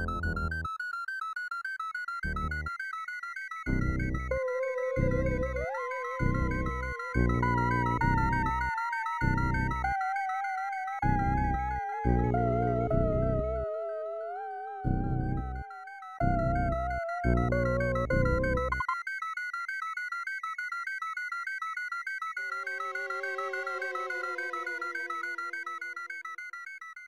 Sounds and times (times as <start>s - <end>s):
Music: 0.0s - 27.0s.